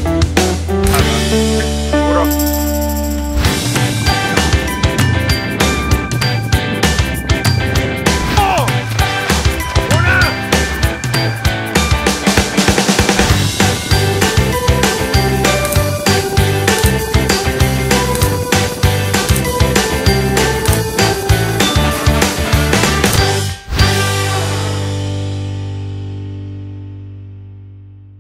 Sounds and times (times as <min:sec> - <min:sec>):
Music: 0:00.0 - 0:28.2
Speech: 0:08.3 - 0:08.8, 0:09.9 - 0:10.4.